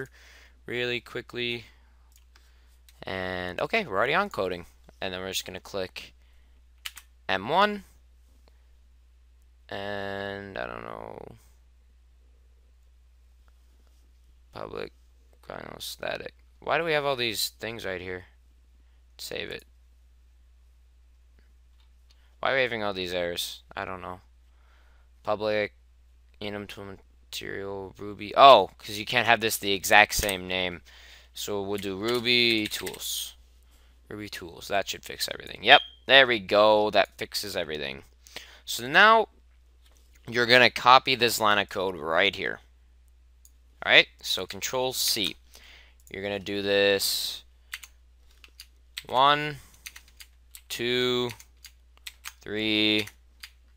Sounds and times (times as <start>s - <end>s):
Speech: 0.7s - 1.7s, 3.0s - 6.1s, 7.3s - 7.9s, 9.7s - 11.5s, 14.6s - 18.3s, 19.2s - 19.7s, 22.4s - 24.3s, 25.2s - 25.8s, 26.4s - 30.8s, 31.4s - 33.4s, 34.1s - 38.1s, 38.7s - 39.3s, 40.3s - 42.7s, 43.8s - 45.4s, 46.1s - 47.5s, 49.0s - 49.6s, 50.7s - 51.4s, 52.4s - 53.2s.